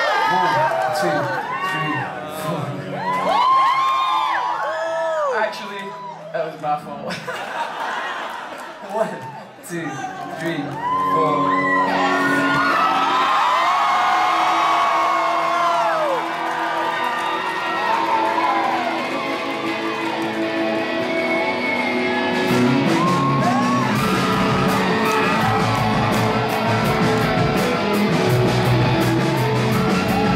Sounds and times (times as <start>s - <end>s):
Music: 0.0s - 4.4s, 10.1s - 30.3s.